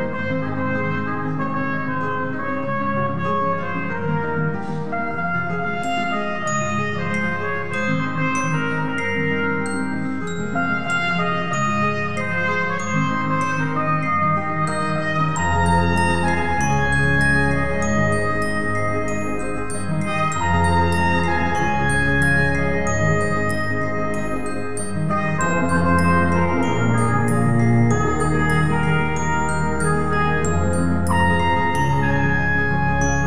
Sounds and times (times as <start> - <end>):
Glockenspiel: 0.0 - 33.2
Trumpet: 0.0 - 33.2.